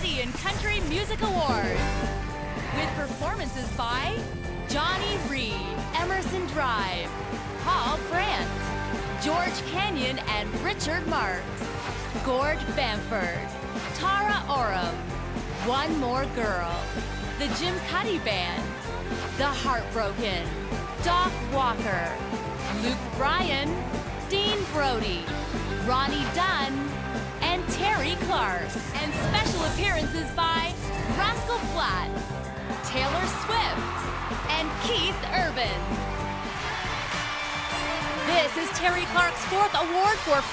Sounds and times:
Speech: 0.0 - 2.0, 2.7 - 8.6, 9.2 - 11.6, 12.2 - 15.0, 15.6 - 18.7, 19.3 - 22.2, 22.8 - 33.9, 34.5 - 35.8, 38.2 - 40.5
Background music: 0.0 - 40.5.

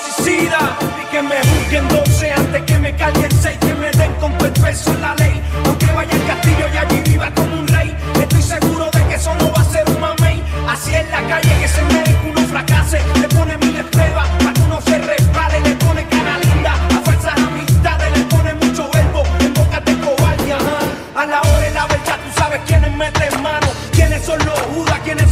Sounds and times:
Ska: 0.0 - 25.3
Soul music: 0.0 - 25.3.

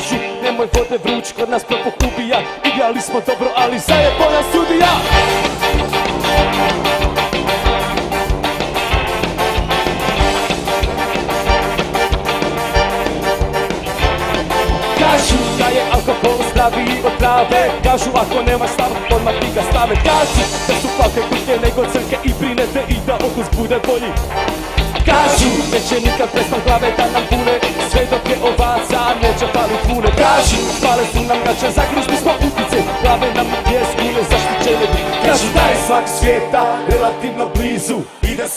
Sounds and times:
Music: 0.0 - 38.5.

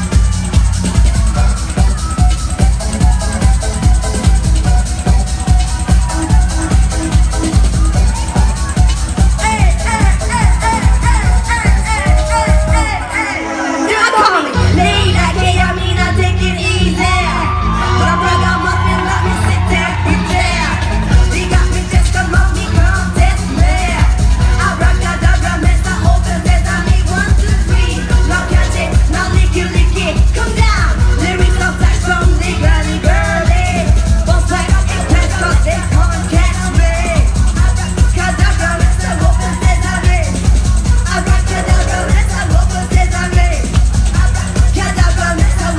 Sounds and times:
Music: 0.0 - 45.7.

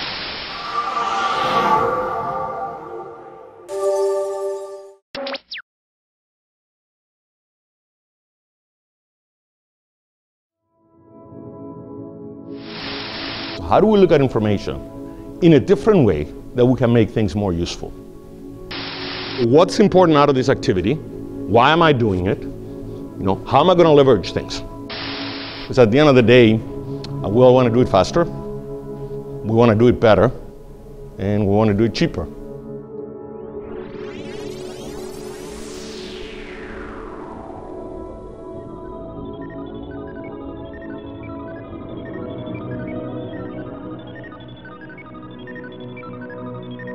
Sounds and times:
Music: 3.5 - 5.0, 10.6 - 46.9
Speech: 13.6 - 14.8, 15.4 - 17.9, 19.4 - 22.5, 23.2 - 24.7, 25.7 - 26.6, 27.2 - 28.3, 29.5 - 30.4, 31.2 - 32.3.

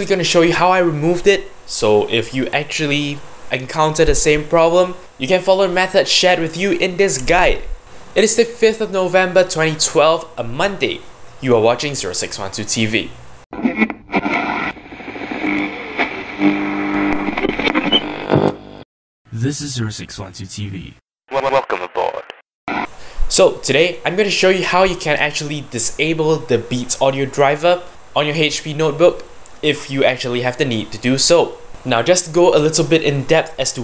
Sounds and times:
Speech: 0.0 - 13.2, 19.3 - 22.3, 23.3 - 33.8
Radio: 13.6 - 18.6, 21.3 - 22.9.

